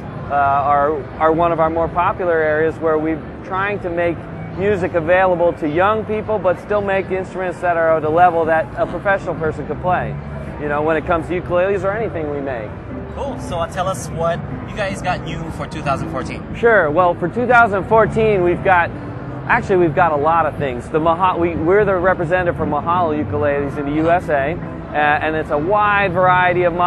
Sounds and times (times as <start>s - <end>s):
Music: 0.0s - 26.8s
Speech: 0.3s - 18.9s.